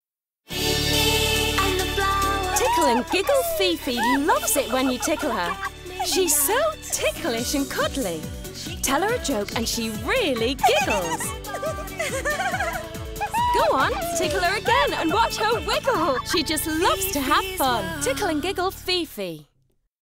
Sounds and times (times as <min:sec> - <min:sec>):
Music: 0:00.5 - 0:19.8
Giggle: 0:02.6 - 0:06.5, 0:10.3 - 0:14.4
Speech: 0:02.6 - 0:11.3, 0:13.4 - 0:19.5.